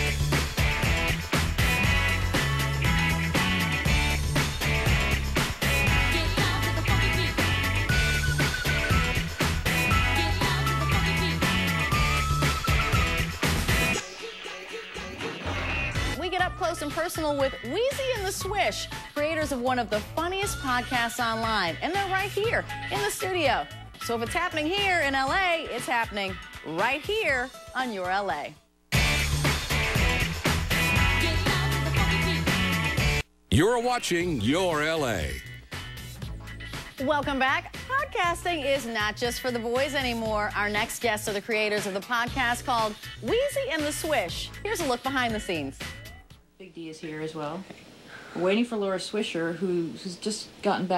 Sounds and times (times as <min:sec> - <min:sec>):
Music: 0:00.0 - 0:47.4
Speech: 0:33.5 - 0:35.4.